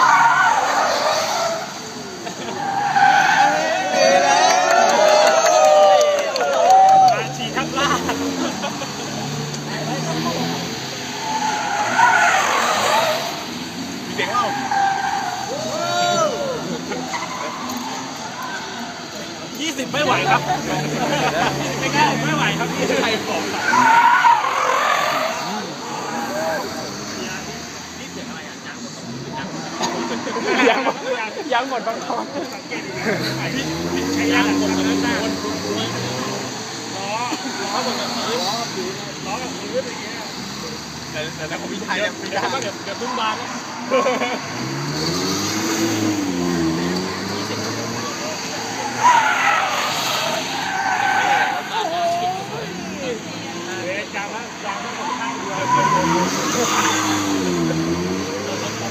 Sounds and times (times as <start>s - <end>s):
Speech: 6.0s - 8.6s, 9.6s - 12.2s, 18.3s - 24.0s, 25.0s - 44.2s, 46.8s - 49.4s, 51.0s - 58.9s.